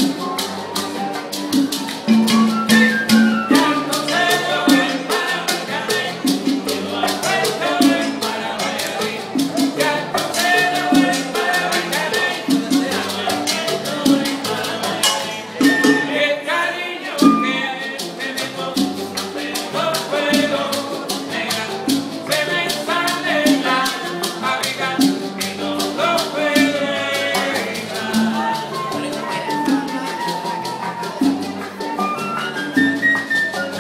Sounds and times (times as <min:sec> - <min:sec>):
Music: 0:00.0 - 0:33.8.